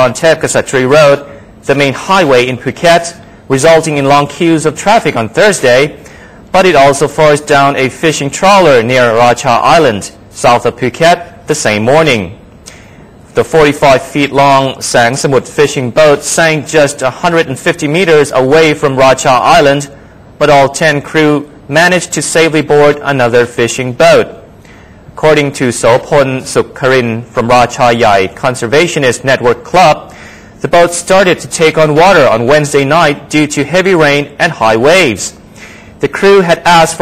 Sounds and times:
Speech: 0.0 - 12.4, 13.4 - 24.4, 25.2 - 35.4, 36.0 - 37.0.

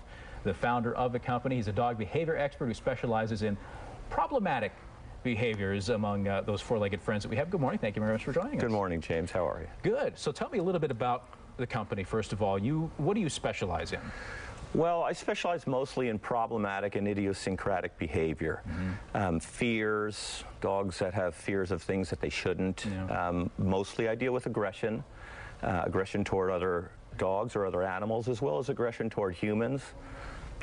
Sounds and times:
Speech: 0.5 - 14.0, 19.2 - 25.0, 25.6 - 30.0.

